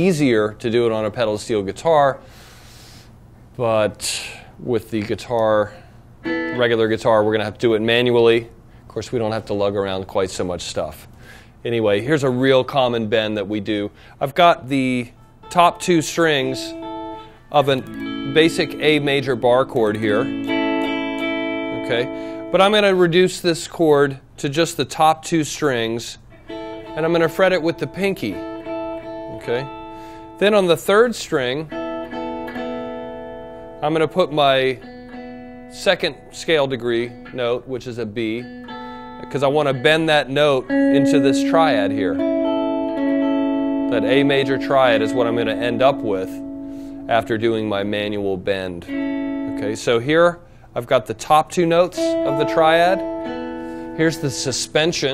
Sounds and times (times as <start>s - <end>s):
Strum: 6.2s - 8.0s, 15.5s - 22.6s, 38.2s - 50.2s, 51.3s - 55.1s.